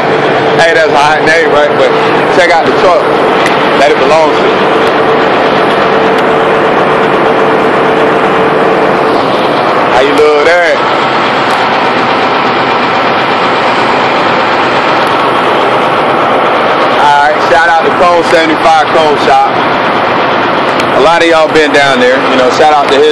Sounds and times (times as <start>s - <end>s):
Motor vehicle (road): 0.0s - 23.1s
Speech: 0.6s - 3.1s, 3.8s - 4.5s, 9.9s - 10.8s, 17.0s - 19.6s, 21.0s - 23.1s.